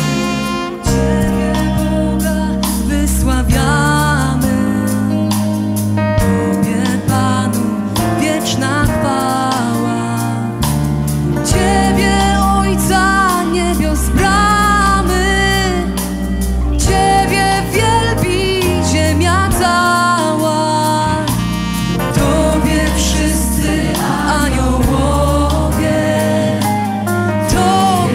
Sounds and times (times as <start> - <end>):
Music: 0.0 - 28.1.